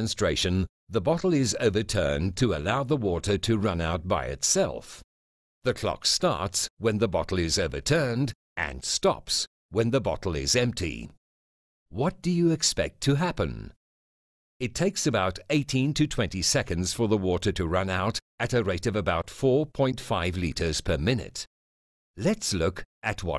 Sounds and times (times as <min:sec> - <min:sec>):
Speech: 0:00.0 - 0:05.0, 0:05.7 - 0:11.2, 0:11.9 - 0:13.8, 0:14.6 - 0:21.5, 0:22.2 - 0:23.3.